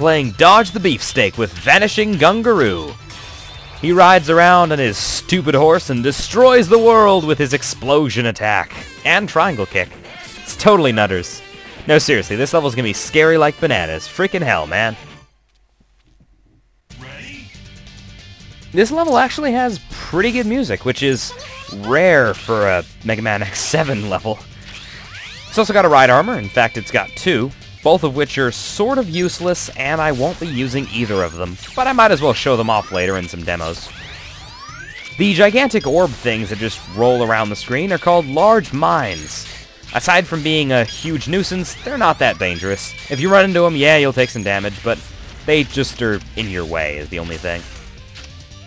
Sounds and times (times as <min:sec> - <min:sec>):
Speech: 0:00.0 - 0:03.0, 0:03.8 - 0:15.0, 0:17.0 - 0:17.5, 0:18.8 - 0:24.4, 0:25.6 - 0:33.9, 0:35.2 - 0:47.7
Music: 0:00.0 - 0:15.4, 0:16.9 - 0:48.6.